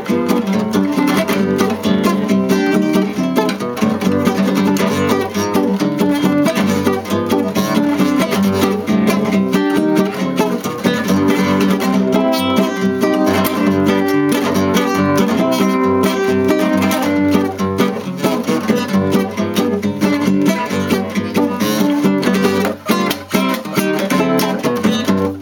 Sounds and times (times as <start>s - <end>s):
Acoustic guitar: 0.0s - 25.4s
Strum: 0.0s - 25.4s.